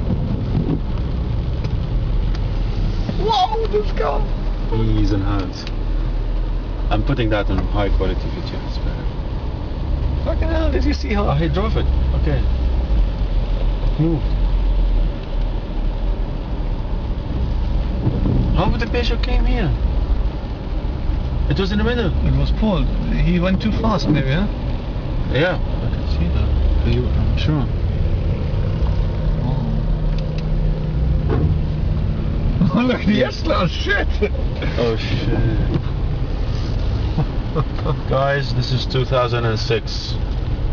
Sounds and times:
Speech: 0:03.2 - 0:05.7, 0:06.9 - 0:09.1, 0:10.3 - 0:12.5, 0:18.6 - 0:19.8, 0:21.5 - 0:24.5, 0:25.3 - 0:27.8, 0:32.6 - 0:35.5, 0:37.8 - 0:40.2.

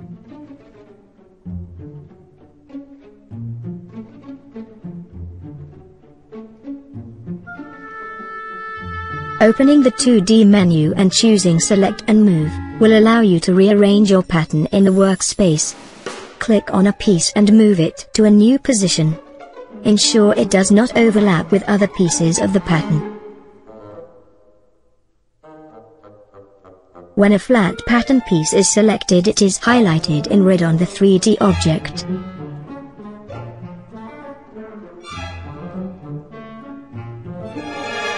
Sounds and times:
Brass instrument: 0:07.0 - 0:13.3, 0:19.4 - 0:24.5, 0:25.4 - 0:29.0, 0:31.3 - 0:38.1.

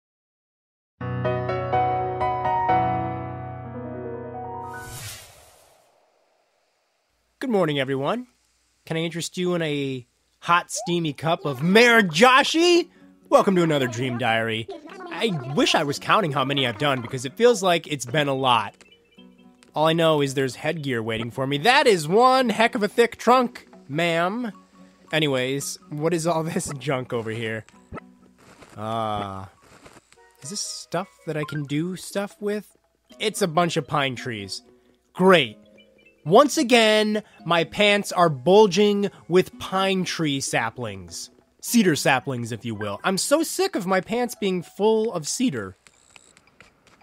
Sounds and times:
Music: 0:01.0 - 0:05.0, 0:10.8 - 0:45.8
Speech: 0:07.4 - 0:08.3, 0:08.9 - 0:18.7, 0:19.8 - 0:24.5, 0:25.2 - 0:27.6, 0:28.8 - 0:29.5, 0:30.4 - 0:34.6, 0:35.2 - 0:35.6, 0:36.3 - 0:45.8.

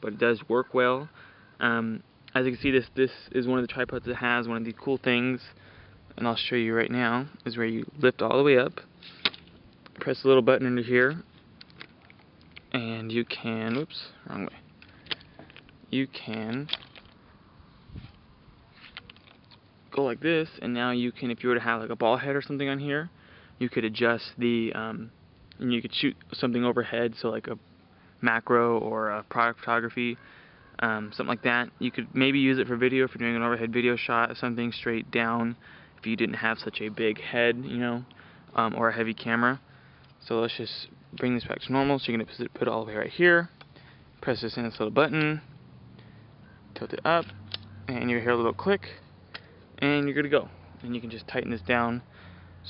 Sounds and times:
Speech: 0:00.0 - 0:05.6, 0:06.2 - 0:08.9, 0:10.0 - 0:11.3, 0:12.7 - 0:14.6, 0:15.9 - 0:16.8, 0:19.9 - 0:27.6, 0:28.2 - 0:30.2, 0:30.8 - 0:39.6, 0:40.2 - 0:43.5, 0:44.2 - 0:45.5, 0:46.8 - 0:47.3, 0:47.9 - 0:49.0, 0:49.8 - 0:52.0.

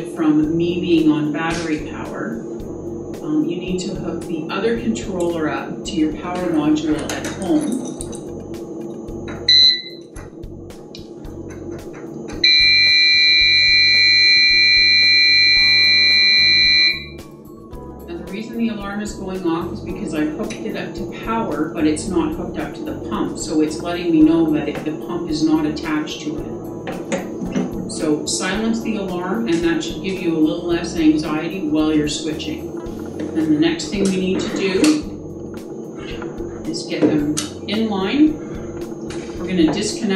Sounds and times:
Speech: 0:00.0 - 0:02.4, 0:03.2 - 0:07.8, 0:18.1 - 0:26.5, 0:27.9 - 0:32.6, 0:33.4 - 0:35.1, 0:36.7 - 0:38.4, 0:39.4 - 0:40.1
Music: 0:00.0 - 0:40.1
Alarm: 0:09.4 - 0:10.2, 0:12.3 - 0:17.3.

